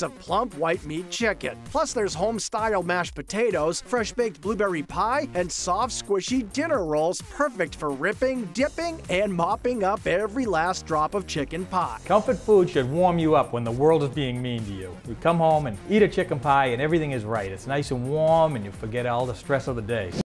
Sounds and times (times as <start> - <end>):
Music: 0.0 - 20.2
Speech: 0.0 - 20.2.